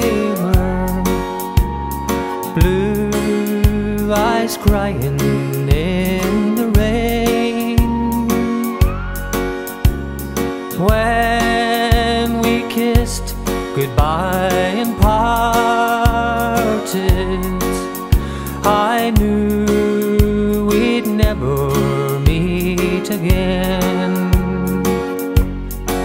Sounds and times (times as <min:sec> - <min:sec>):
Music: 0:00.0 - 0:26.0.